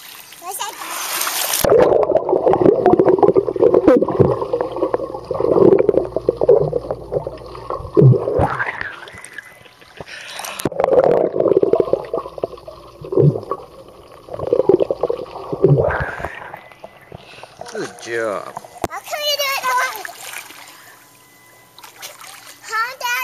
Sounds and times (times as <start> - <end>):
Gurgling: 1.6 - 17.8.